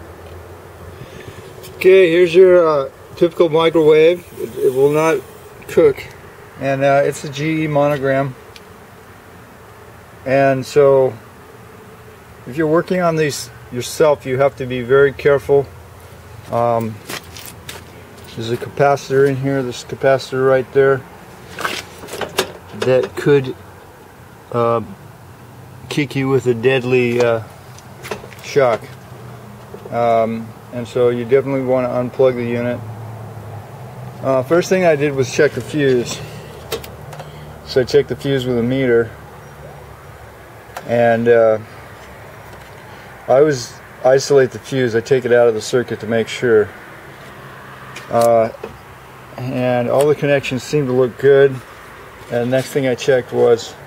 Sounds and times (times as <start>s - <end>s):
Speech: 1.8s - 8.4s, 10.3s - 11.2s, 12.5s - 15.7s, 16.5s - 17.0s, 18.3s - 21.0s, 22.8s - 23.6s, 24.5s - 25.0s, 25.9s - 27.5s, 28.4s - 28.9s, 29.9s - 32.8s, 34.2s - 36.3s, 37.7s - 39.2s, 40.8s - 41.7s, 43.3s - 46.7s, 48.1s - 48.6s, 49.4s - 51.6s, 52.3s - 53.8s.